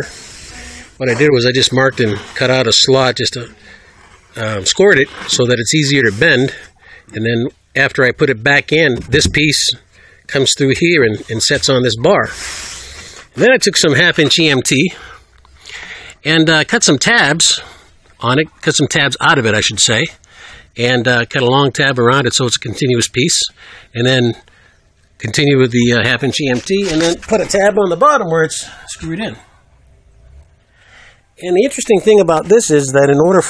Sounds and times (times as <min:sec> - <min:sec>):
Speech: 0:01.0 - 0:03.6, 0:04.4 - 0:12.4, 0:13.4 - 0:15.0, 0:16.2 - 0:20.2, 0:20.8 - 0:24.4, 0:25.2 - 0:29.5, 0:31.4 - 0:33.5.